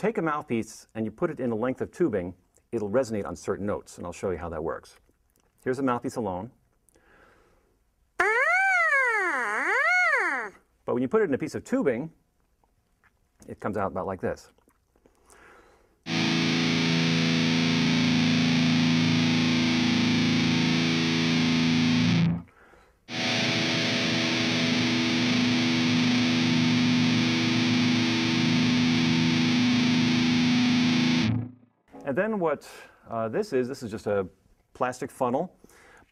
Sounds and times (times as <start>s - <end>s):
Speech: 0.0s - 5.0s, 5.6s - 6.6s, 10.9s - 12.2s, 13.4s - 14.6s, 32.0s - 35.6s
Music: 16.1s - 22.4s, 23.1s - 31.6s.